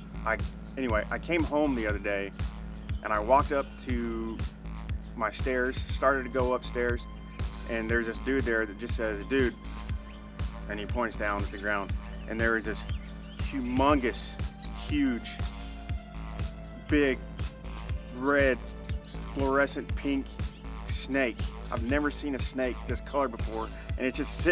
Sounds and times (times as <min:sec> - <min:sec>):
Music: 0:00.0 - 0:24.5
Male speech, man speaking: 0:00.3 - 0:02.3, 0:03.0 - 0:04.4, 0:05.2 - 0:07.0, 0:07.7 - 0:09.6, 0:10.7 - 0:15.4, 0:16.9 - 0:17.2, 0:18.2 - 0:18.6, 0:19.4 - 0:24.5.